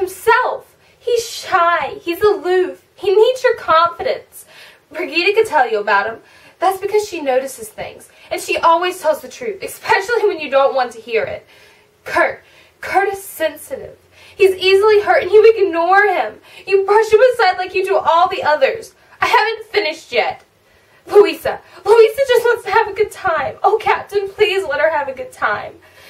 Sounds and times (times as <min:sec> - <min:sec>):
Speech: 0:00.0 - 0:11.4, 0:12.0 - 0:20.5, 0:21.1 - 0:25.8.